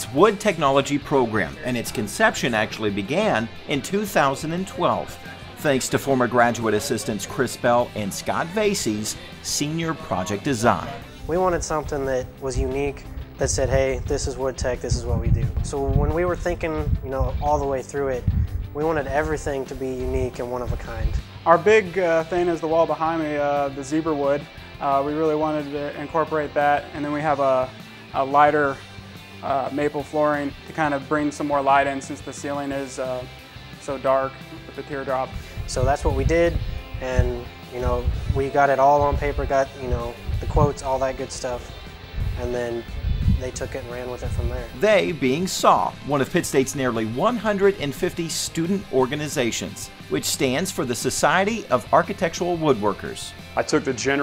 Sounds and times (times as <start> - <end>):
Speech: 0.0 - 28.8, 29.4 - 41.8, 42.4 - 54.2
Music: 0.0 - 54.2.